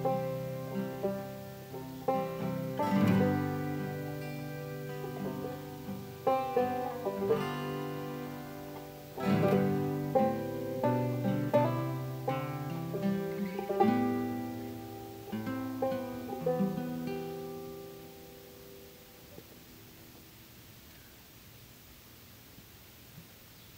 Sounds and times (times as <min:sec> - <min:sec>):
Accordion: 0:00.0 - 0:17.8
Guitar: 0:00.0 - 0:21.0.